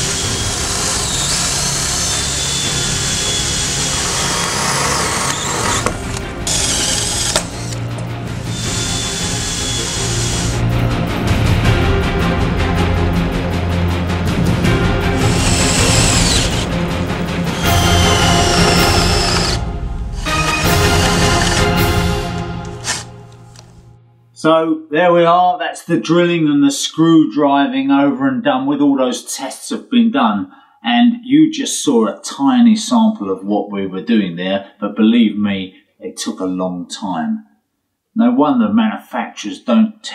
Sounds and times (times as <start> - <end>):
Music: 0.0 - 25.4.